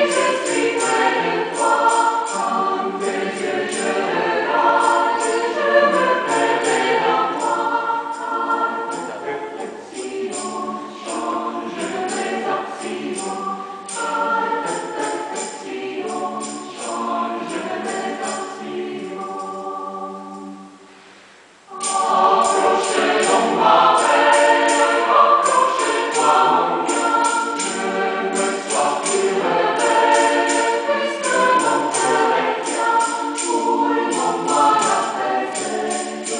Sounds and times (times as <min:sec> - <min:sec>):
Music: 0:00.0 - 0:36.3.